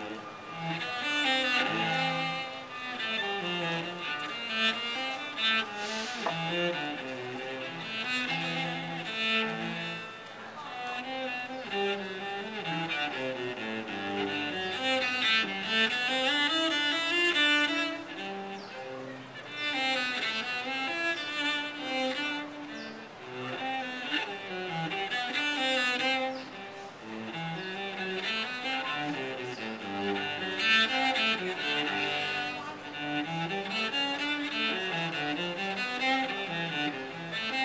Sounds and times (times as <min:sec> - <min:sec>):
Cello: 0:00.0 - 0:37.6.